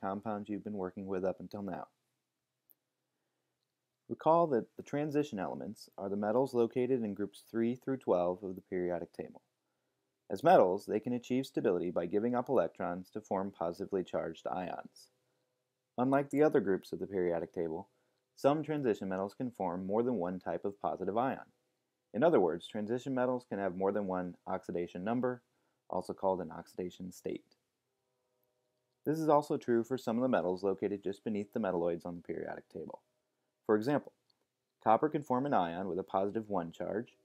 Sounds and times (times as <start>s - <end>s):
Speech: 0.0s - 2.0s, 4.1s - 9.5s, 10.3s - 15.1s, 16.0s - 21.6s, 22.2s - 27.6s, 29.1s - 34.2s, 34.8s - 37.2s.